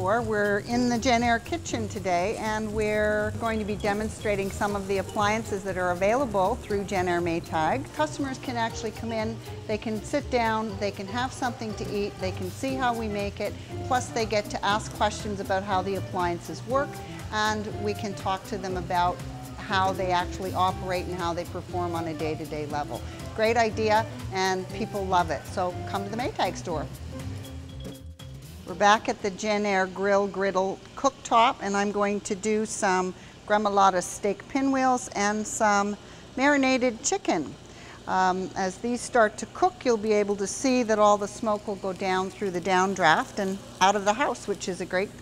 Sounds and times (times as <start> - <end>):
Music: 0.0 - 32.6, 38.5 - 45.2.